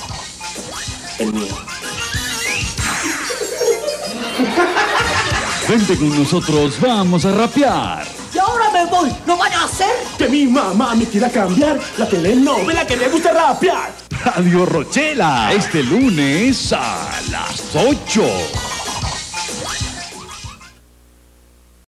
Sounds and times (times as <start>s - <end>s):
Music: 0.0s - 20.8s
Speech: 5.7s - 18.6s.